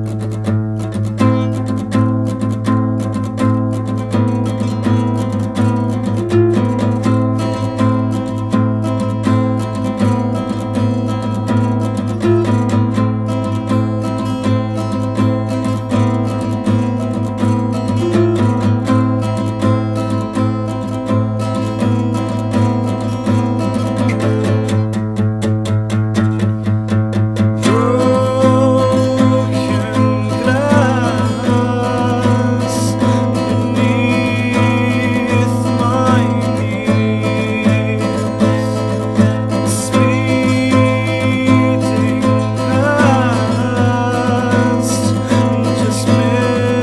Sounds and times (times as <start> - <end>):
Music: 0.0 - 46.8.